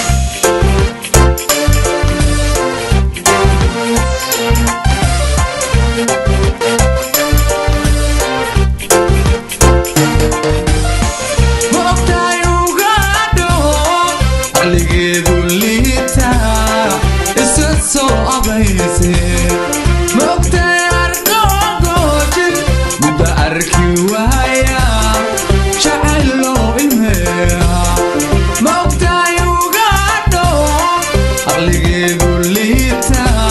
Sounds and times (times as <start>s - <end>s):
Music of Africa: 0.0s - 33.5s
Reggae: 0.0s - 33.5s.